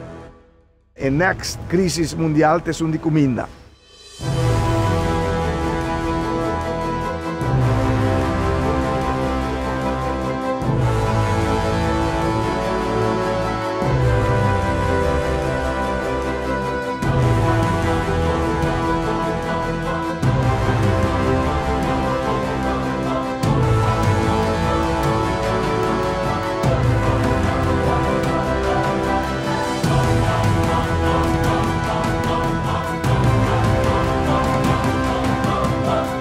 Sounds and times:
Music: 0:00.0 - 0:36.2.

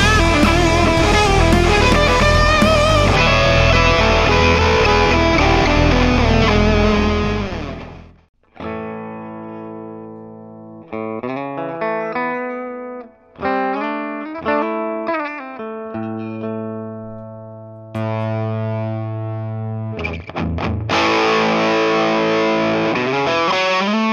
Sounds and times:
Distortion: 0:00.0 - 0:24.1
Effects unit: 0:00.0 - 0:24.1
Electric guitar: 0:00.0 - 0:24.1.

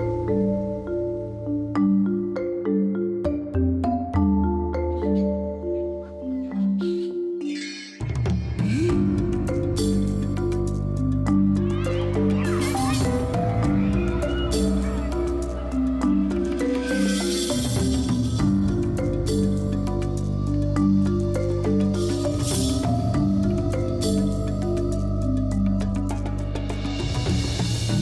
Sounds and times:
Music: 0:00.0 - 0:28.0.

